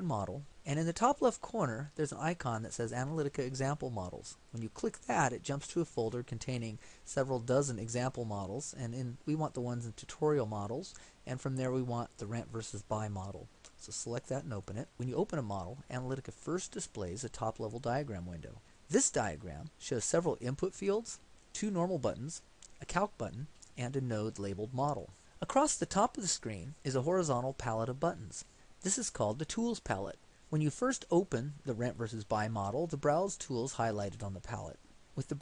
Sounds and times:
Narration, monologue: 0.0s - 35.4s.

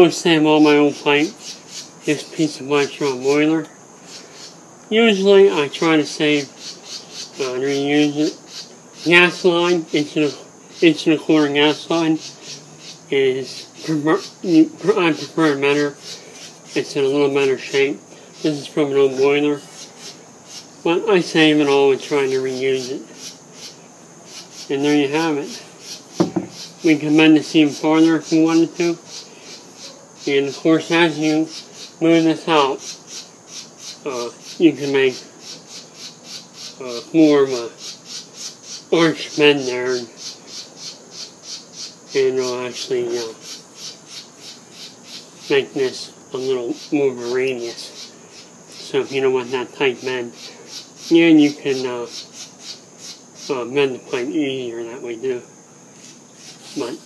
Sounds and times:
Speech: 0.0s - 1.3s, 2.1s - 3.7s, 7.4s - 8.4s, 9.1s - 12.2s, 13.1s - 16.0s, 16.8s - 19.6s, 20.9s - 23.1s, 24.7s - 25.6s, 26.8s - 29.0s, 30.3s - 32.8s, 34.1s - 35.2s, 36.8s - 37.7s, 39.0s - 40.1s, 42.2s - 43.4s, 45.5s - 48.0s, 48.8s - 50.4s, 51.1s - 52.1s, 53.5s - 55.5s, 56.8s - 57.0s.

